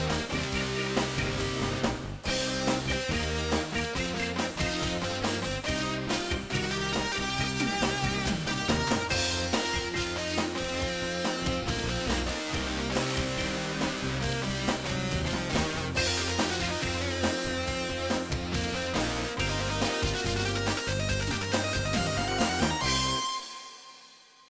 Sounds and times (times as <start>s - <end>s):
Soundtrack music: 0.0s - 24.5s.